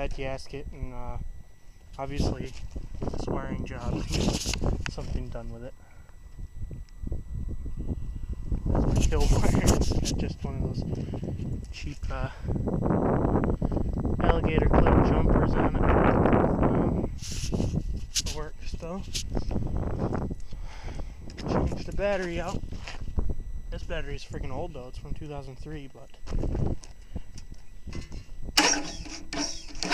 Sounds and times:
Speech: 0:00.0 - 0:01.2, 0:02.0 - 0:02.6, 0:03.2 - 0:04.2, 0:04.9 - 0:05.8, 0:08.9 - 0:10.9, 0:11.7 - 0:12.4, 0:14.2 - 0:16.0, 0:18.2 - 0:19.2, 0:21.8 - 0:22.6, 0:23.7 - 0:26.2.

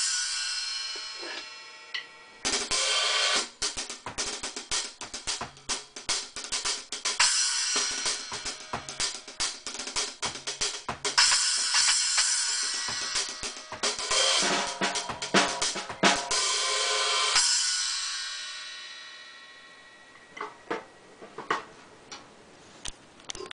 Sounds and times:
Drum kit: 0:00.0 - 0:21.7.

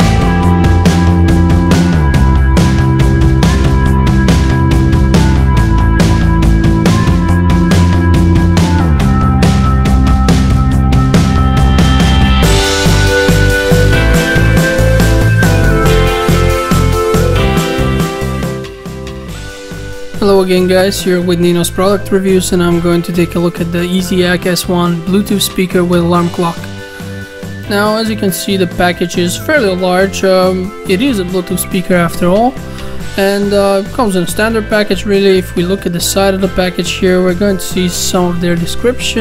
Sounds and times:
Music: 0:00.0 - 0:39.2
Speech: 0:20.2 - 0:26.7, 0:27.7 - 0:32.6, 0:33.2 - 0:39.2.

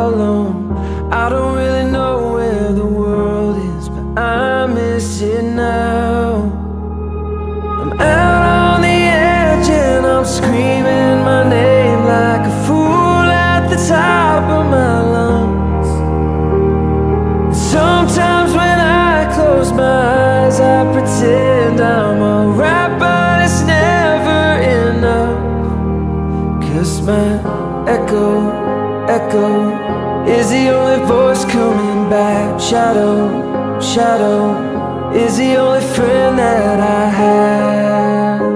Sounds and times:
Music: 0:00.0 - 0:38.5.

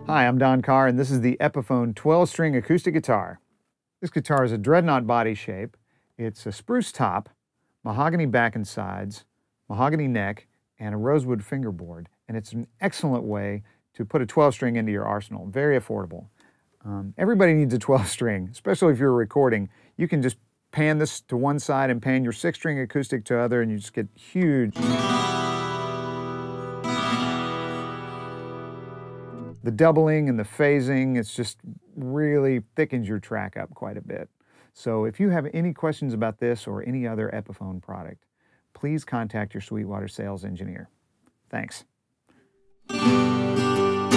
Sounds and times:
Speech: 0:00.0 - 0:03.4, 0:04.0 - 0:24.8, 0:29.6 - 0:40.9, 0:41.5 - 0:41.9.

